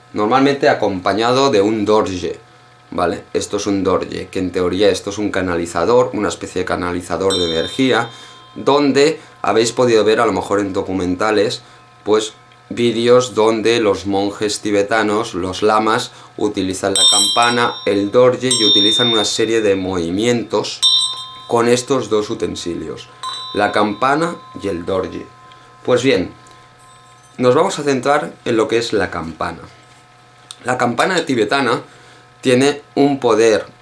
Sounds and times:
Speech: 0.1s - 20.8s, 21.5s - 25.3s, 25.9s - 26.4s, 27.4s - 29.8s, 30.5s - 33.8s.

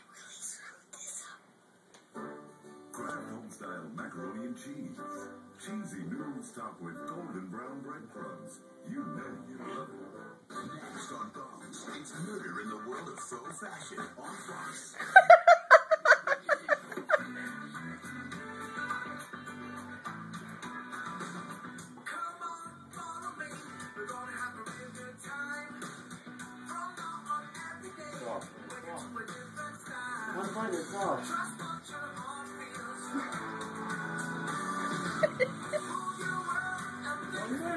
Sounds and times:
Music: 2.0s - 37.7s
Speech: 3.1s - 15.0s, 30.3s - 31.3s, 37.4s - 37.7s.

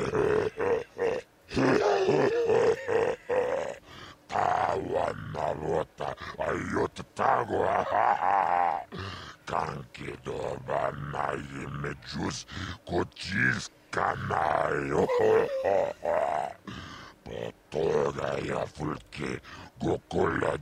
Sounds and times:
Speech: 0.0s - 0.8s, 1.5s - 16.6s, 17.2s - 20.6s.

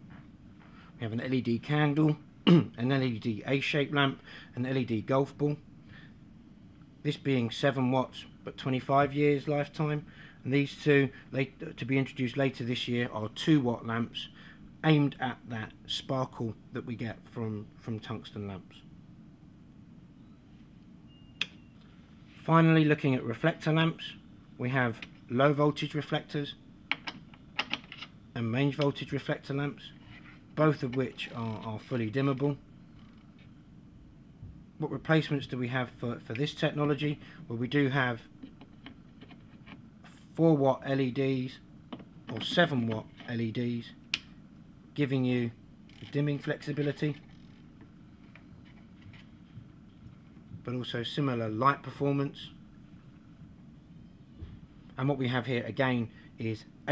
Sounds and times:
Speech: 1.0s - 5.6s, 7.0s - 18.9s, 22.4s - 26.6s, 28.4s - 30.0s, 30.6s - 32.6s, 34.8s - 38.3s, 40.1s - 41.6s, 42.3s - 44.0s, 45.0s - 47.2s, 50.6s - 52.6s, 55.0s - 56.9s.

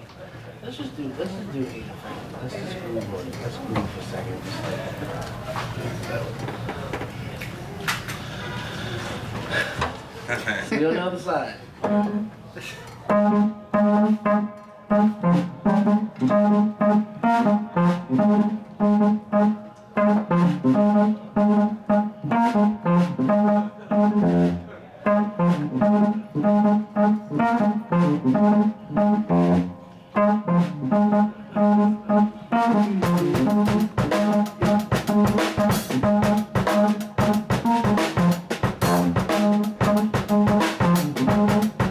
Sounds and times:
Speech: 10.3s - 11.7s.

